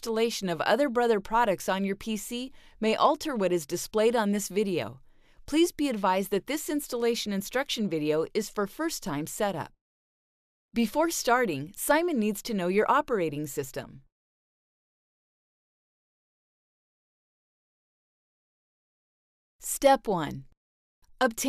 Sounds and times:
Speech: 0.0s - 9.7s, 10.8s - 14.0s, 19.6s - 20.5s, 21.2s - 21.4s.

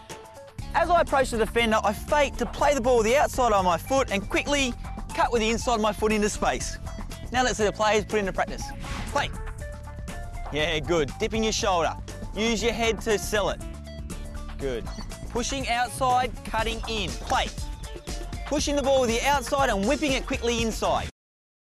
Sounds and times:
Music: 0.0s - 21.2s
Speech: 0.8s - 9.3s, 10.5s - 13.6s, 15.4s - 17.5s, 18.5s - 21.1s.

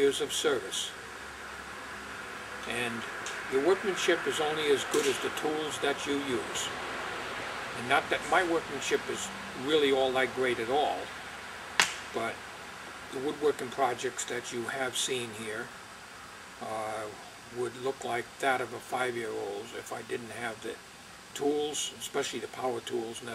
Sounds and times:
Speech: 0.0s - 1.0s, 2.7s - 6.7s, 7.8s - 11.1s, 12.2s - 12.4s, 13.1s - 15.7s, 16.6s - 20.8s, 21.4s - 23.3s.

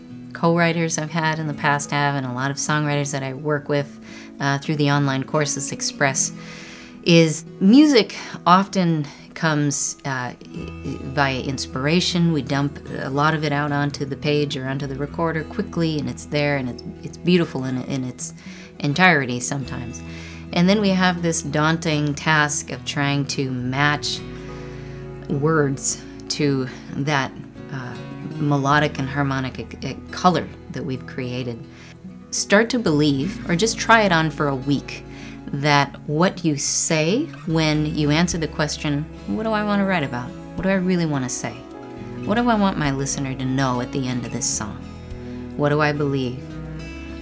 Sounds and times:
Music: 0.0s - 47.2s
Speech: 0.4s - 6.4s, 7.1s - 24.2s, 25.3s - 31.6s, 32.3s - 41.6s, 42.2s - 44.8s, 45.6s - 46.4s.

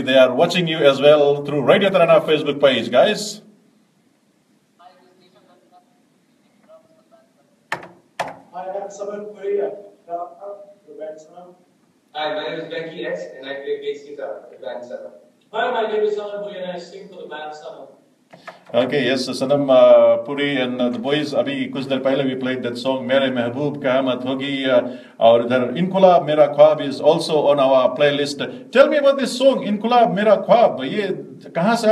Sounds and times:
Speech: 0.0s - 3.4s, 4.8s - 7.4s, 8.6s - 11.6s, 12.2s - 18.0s, 18.7s - 31.9s.

